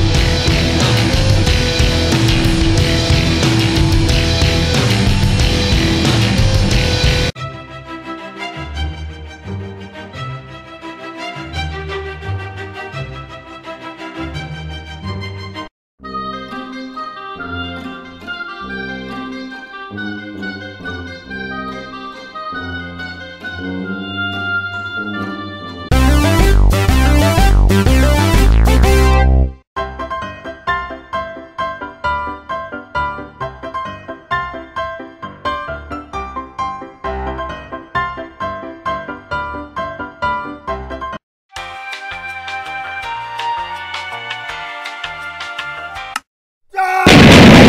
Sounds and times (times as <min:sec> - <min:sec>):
Pizzicato: 0:16.2 - 0:25.9.